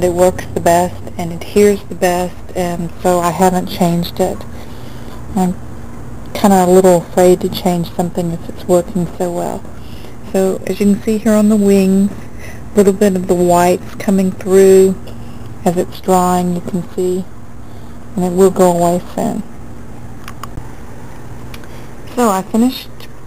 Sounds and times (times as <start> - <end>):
Speech: 0.0 - 4.5, 5.4 - 5.6, 6.4 - 9.6, 10.3 - 12.2, 12.8 - 15.0, 15.6 - 17.3, 18.2 - 19.5, 22.1 - 23.1.